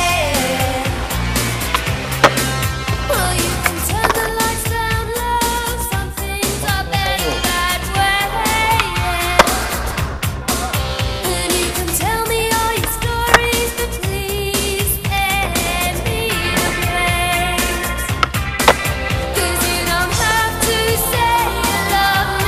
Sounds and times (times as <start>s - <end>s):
Music of Asia: 0.0s - 22.4s
Skateboard: 0.2s - 4.9s, 11.3s - 22.4s.